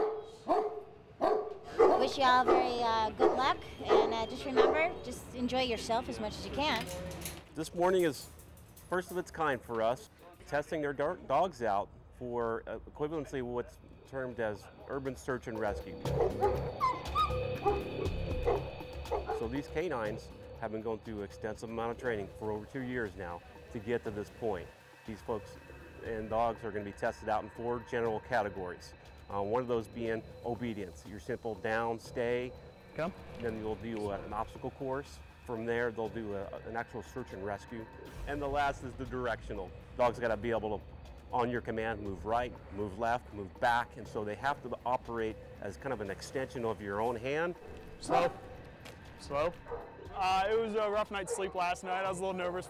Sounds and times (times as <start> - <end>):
Music: 2.0 - 11.0, 13.9 - 52.7.